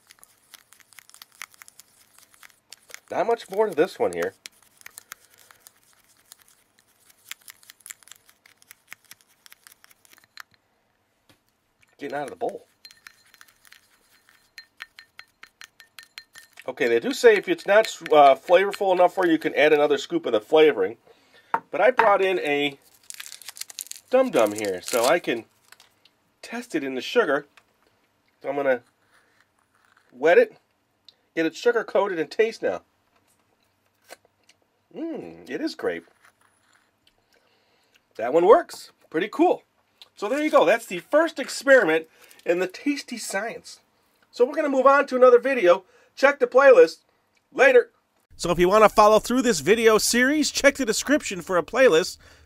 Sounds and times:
Inside, small room: 0:00.0 - 0:52.4
Speech: 0:03.1 - 0:04.4, 0:12.0 - 0:12.7, 0:16.7 - 0:21.0, 0:24.1 - 0:25.4, 0:26.4 - 0:27.5, 0:30.2 - 0:30.6, 0:31.4 - 0:32.8, 0:35.0 - 0:36.0, 0:38.2 - 0:39.6, 0:40.2 - 0:43.8, 0:44.4 - 0:47.0, 0:47.6 - 0:52.2.

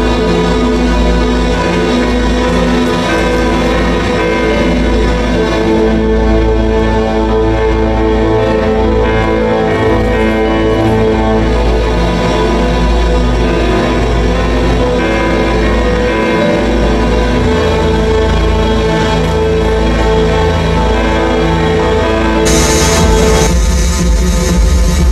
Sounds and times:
Music: 0:00.0 - 0:25.1.

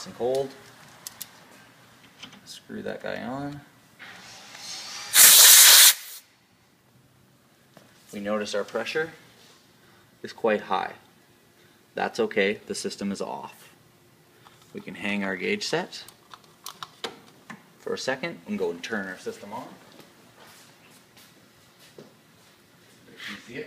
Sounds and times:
Speech: 0:00.0 - 0:00.6, 0:02.5 - 0:03.7, 0:08.1 - 0:09.2, 0:10.2 - 0:11.1, 0:12.0 - 0:13.8, 0:14.7 - 0:16.1, 0:17.8 - 0:19.8, 0:23.1 - 0:23.6.

